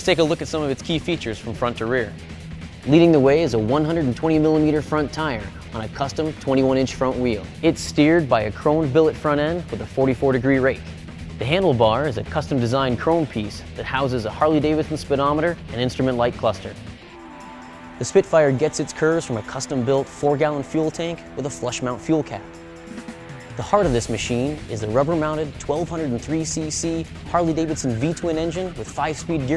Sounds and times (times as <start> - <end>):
Speech: 0.0 - 2.2, 2.9 - 16.8, 18.0 - 22.4, 23.6 - 29.5
Music: 0.0 - 29.5.